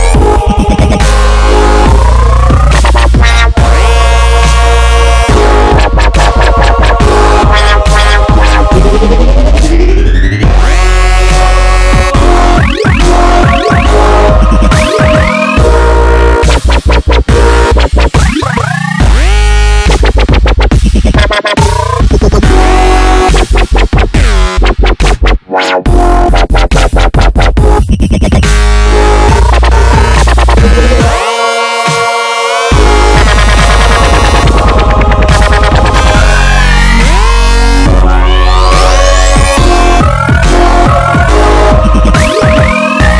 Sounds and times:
Dubstep: 0.0 - 43.1.

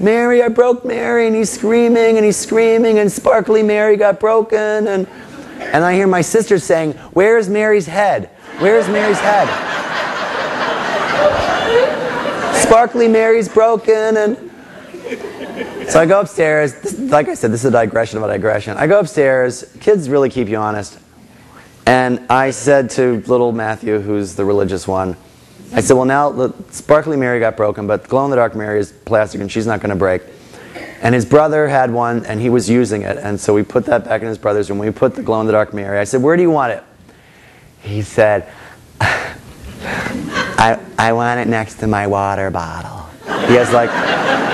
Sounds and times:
Speech: 0.0 - 5.1, 5.7 - 9.6, 12.6 - 14.4, 15.9 - 21.0, 21.9 - 25.2, 25.8 - 30.3, 31.0 - 36.9, 37.8 - 38.5, 40.6 - 43.9.

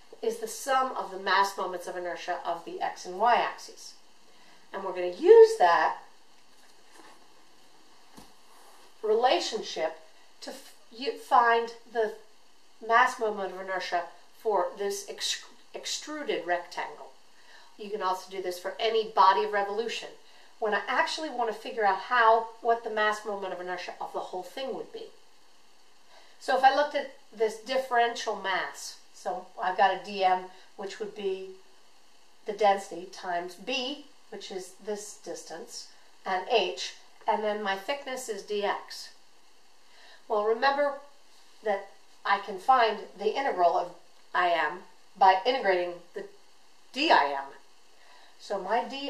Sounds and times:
Inside, small room: 0.0 - 49.1
Speech: 0.1 - 4.0, 4.7 - 6.1, 9.0 - 12.2, 12.8 - 17.2, 17.8 - 25.2, 26.4 - 31.6, 32.4 - 39.2, 40.3 - 46.3, 46.9 - 47.6, 48.4 - 49.1.

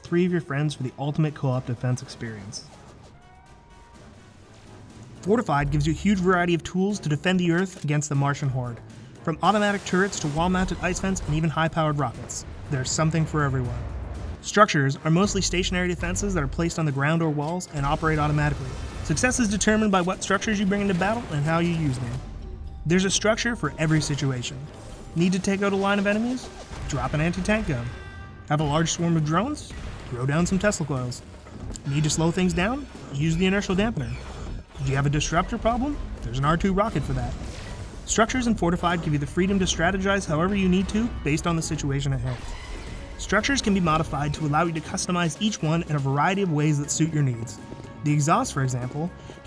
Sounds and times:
Speech: 0.0 - 2.7, 5.2 - 22.2, 22.9 - 27.9, 28.5 - 34.2, 34.8 - 37.4, 38.1 - 42.4, 43.2 - 49.2
Music: 0.0 - 49.4.

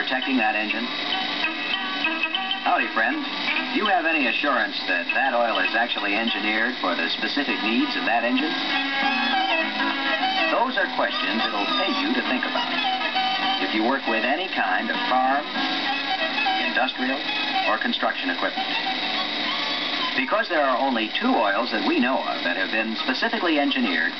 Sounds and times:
Speech: 0.0 - 0.9, 2.7 - 8.6, 10.4 - 12.7, 13.6 - 15.5, 16.6 - 18.6, 20.2 - 24.1
Music: 0.0 - 24.1.

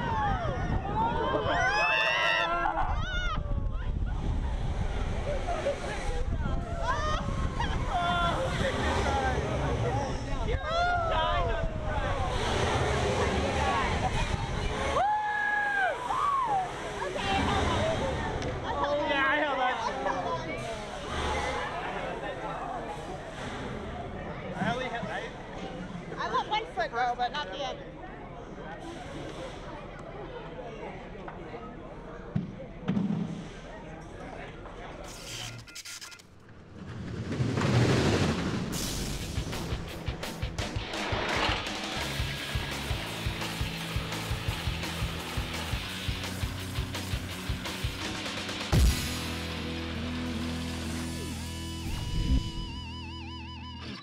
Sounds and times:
Outside, urban or manmade: 0.0 - 54.0
Vehicle: 2.7 - 26.8, 27.5 - 32.2, 32.9 - 54.0
Music: 38.8 - 54.0.

